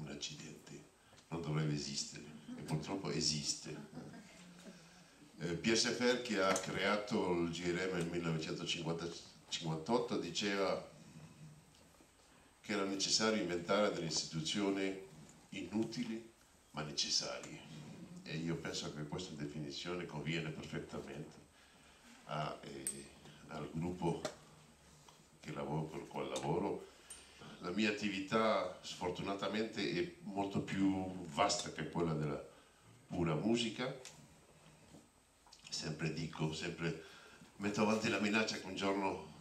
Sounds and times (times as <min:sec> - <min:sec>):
Speech: 0:00.0 - 0:04.8, 0:05.4 - 0:10.9, 0:12.7 - 0:21.4, 0:22.3 - 0:24.4, 0:25.4 - 0:26.9, 0:27.5 - 0:32.5, 0:33.1 - 0:34.1, 0:35.7 - 0:39.4.